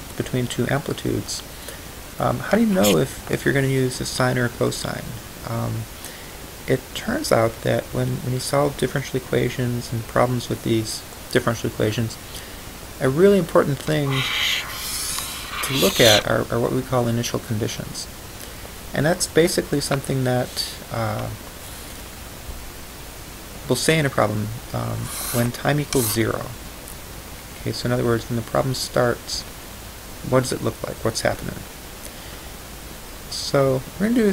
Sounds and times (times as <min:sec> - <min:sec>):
Speech: 0:00.2 - 0:01.5, 0:02.2 - 0:05.9, 0:06.7 - 0:12.2, 0:13.0 - 0:18.1, 0:23.7 - 0:26.6, 0:27.6 - 0:29.5, 0:30.3 - 0:31.7, 0:33.3 - 0:34.3.